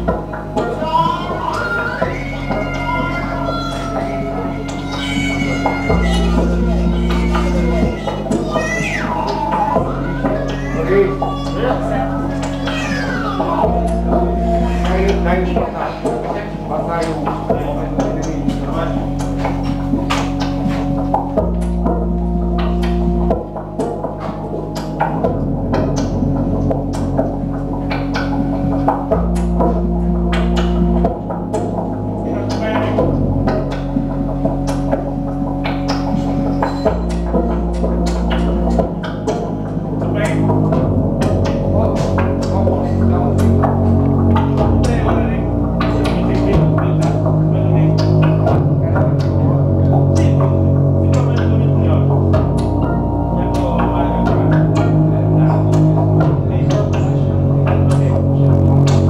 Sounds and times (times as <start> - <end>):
Electronic music: 0.0 - 59.0
Speech: 0.6 - 20.2, 32.2 - 33.2, 39.3 - 59.0.